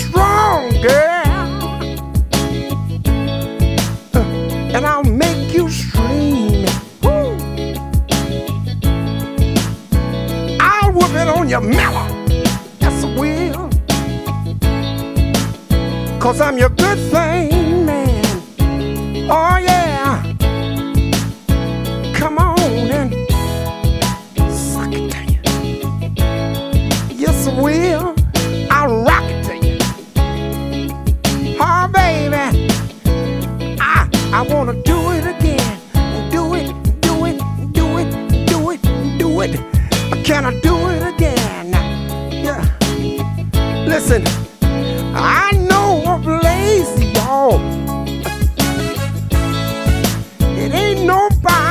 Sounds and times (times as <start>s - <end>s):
Music: 0.0s - 51.7s.